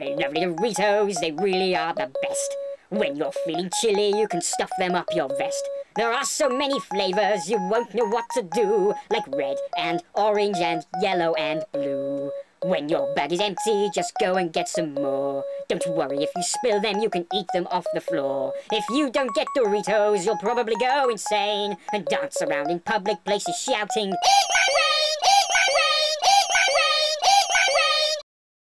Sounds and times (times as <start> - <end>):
Speech: 0.0 - 28.2.